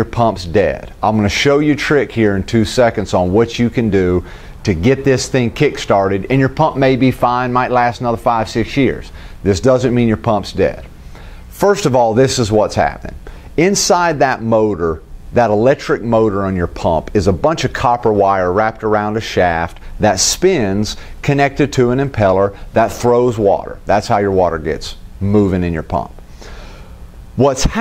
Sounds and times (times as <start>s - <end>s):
Speech: 0.0s - 10.9s, 11.6s - 26.2s, 27.4s - 27.8s.